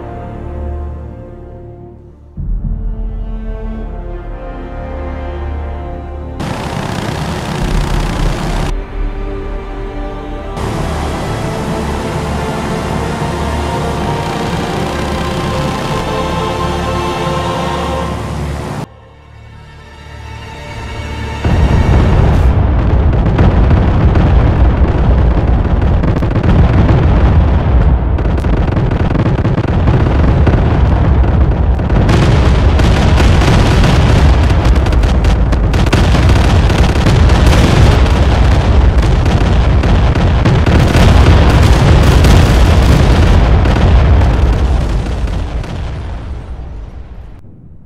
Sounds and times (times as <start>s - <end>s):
Eruption: 6.4s - 16.1s, 21.4s - 47.8s.